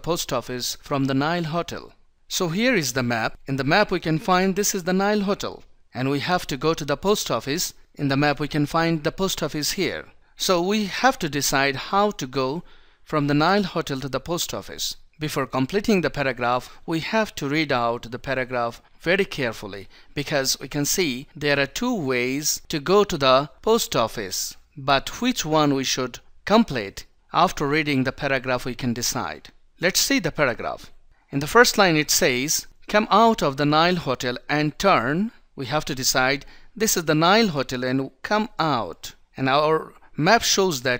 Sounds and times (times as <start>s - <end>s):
Speech: 0.0s - 40.9s.